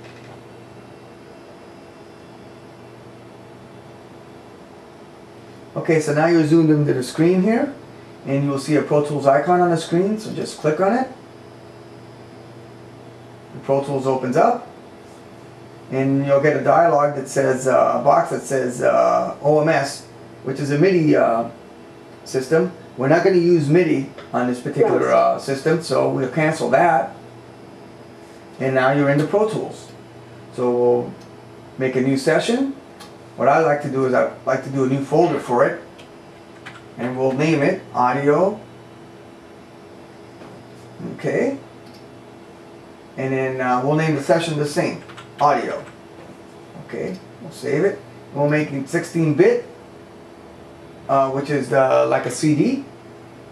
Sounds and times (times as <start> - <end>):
Speech: 5.8 - 11.2, 13.6 - 14.7, 15.9 - 21.6, 22.2 - 27.2, 28.6 - 31.2, 31.8 - 32.8, 33.4 - 35.9, 37.0 - 38.7, 41.0 - 41.7, 43.2 - 45.9, 46.8 - 49.8, 51.1 - 52.9.